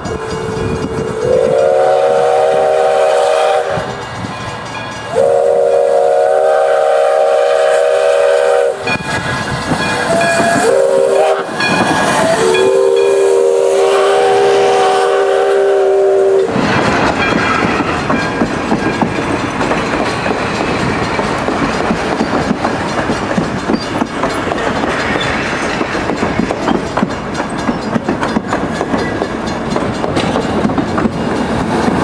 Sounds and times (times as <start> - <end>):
Railroad car, train wagon: 0.0 - 32.0
Train: 0.0 - 32.0
Clickety-clack: 8.8 - 12.6, 16.4 - 32.0.